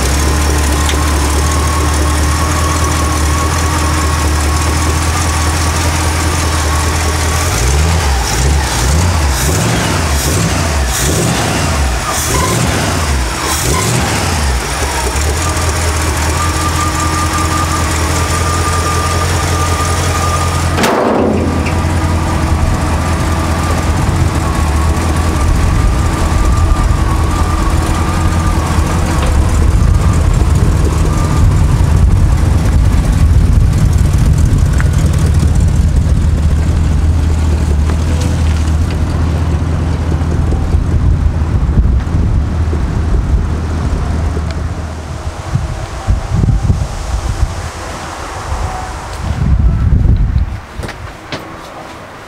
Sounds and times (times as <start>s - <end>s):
Car: 0.0s - 52.2s.